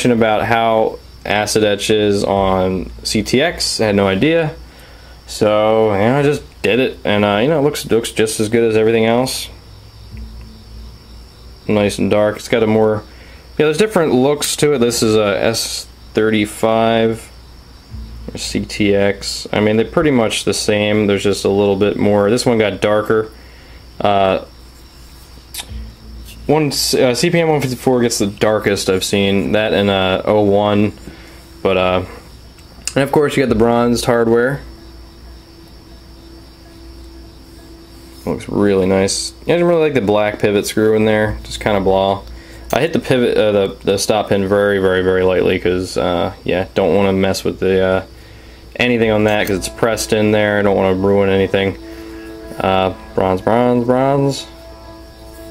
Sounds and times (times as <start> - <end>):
Speech: 0.0 - 4.6, 5.3 - 9.6, 11.7 - 17.3, 18.3 - 23.4, 24.0 - 24.5, 26.5 - 31.0, 31.6 - 32.2, 32.9 - 34.7, 38.2 - 48.1, 48.8 - 51.8, 52.6 - 54.6
Inside, small room: 0.0 - 55.5.